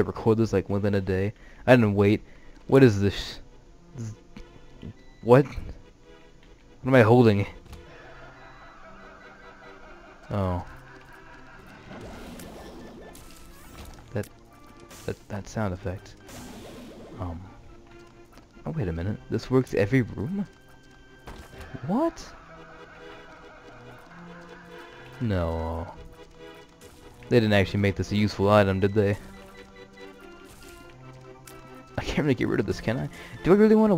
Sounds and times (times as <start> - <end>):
Speech: 0.0 - 3.4, 18.7 - 20.5, 25.2 - 26.0, 27.3 - 29.2, 32.0 - 33.9
Music: 0.0 - 33.9.